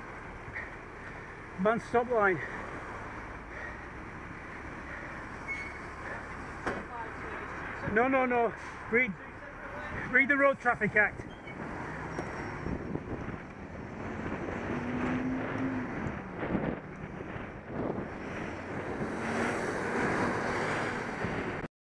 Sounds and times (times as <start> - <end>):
Bus: 0.0 - 21.7.